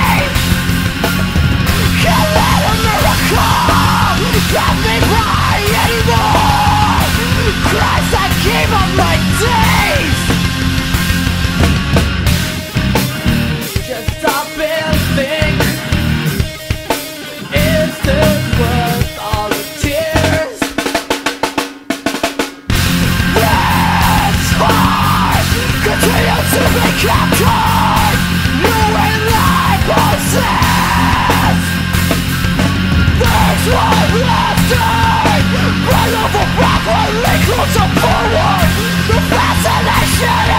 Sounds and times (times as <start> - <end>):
Music: 0.0 - 40.5.